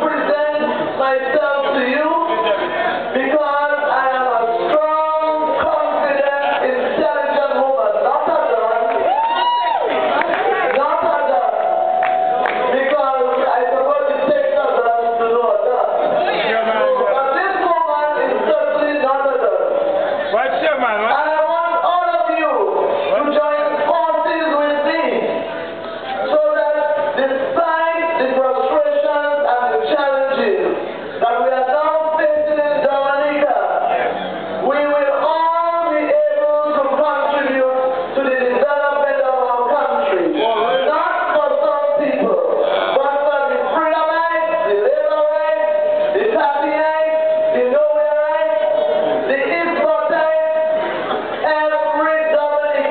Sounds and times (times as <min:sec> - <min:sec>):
Narration, monologue: 0:00.0 - 0:09.0, 0:10.7 - 0:52.9.